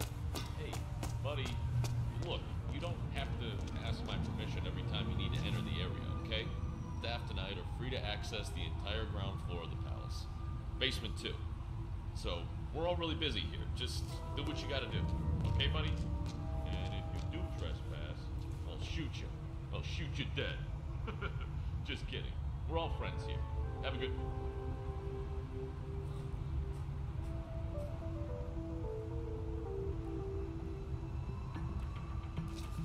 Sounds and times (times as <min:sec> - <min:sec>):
Speech: 0:00.4 - 0:01.6, 0:02.2 - 0:11.4, 0:12.2 - 0:16.0, 0:16.7 - 0:20.7, 0:21.9 - 0:24.3.